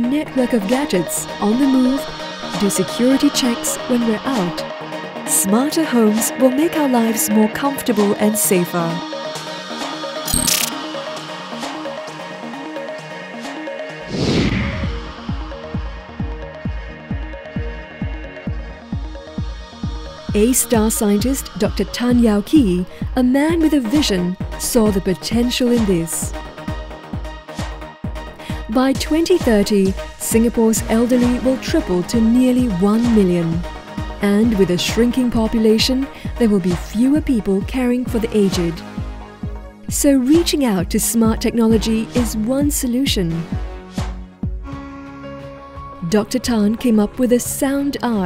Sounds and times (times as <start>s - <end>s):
Speech: 0.0s - 4.6s, 5.3s - 9.0s, 20.4s - 26.3s, 28.7s - 33.6s, 34.2s - 38.8s, 39.9s - 43.5s, 46.0s - 48.2s
Music: 0.0s - 48.2s.